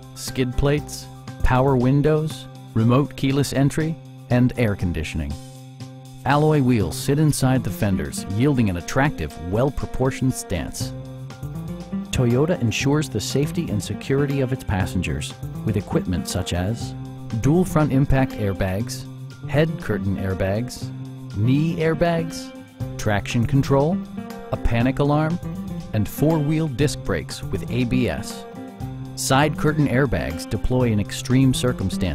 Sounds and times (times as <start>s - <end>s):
Music: 0.0s - 32.1s
Speech: 0.2s - 5.4s, 6.2s - 10.9s, 12.1s - 28.4s, 29.2s - 32.1s.